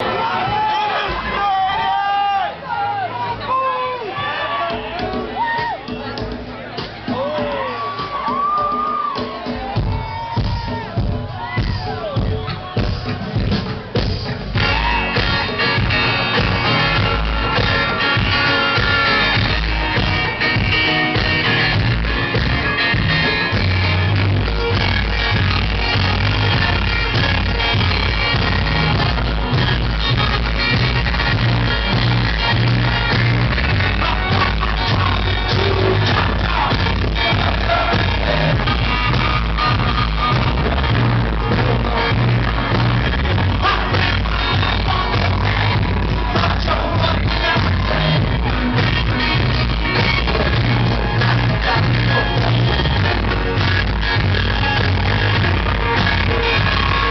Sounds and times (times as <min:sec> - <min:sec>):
Music: 0:00.0 - 0:57.1.